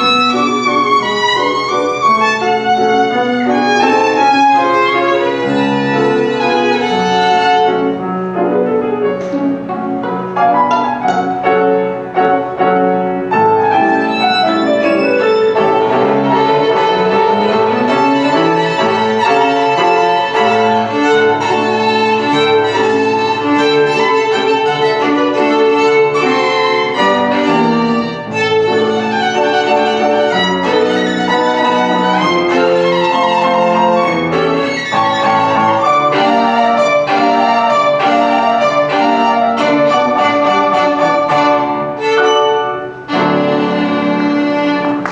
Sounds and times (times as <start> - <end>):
Violin, fiddle: 0.0 - 8.0, 13.4 - 45.1
Inside, large room or hall: 0.0 - 45.1.